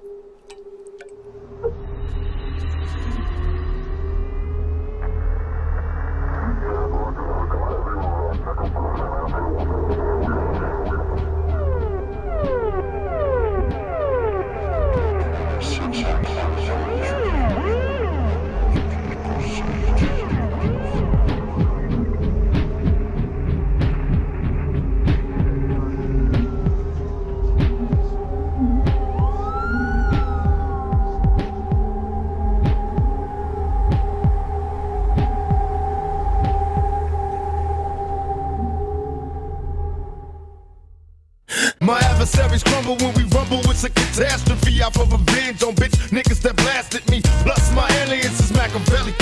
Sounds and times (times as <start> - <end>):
Music: 0.0 - 49.2.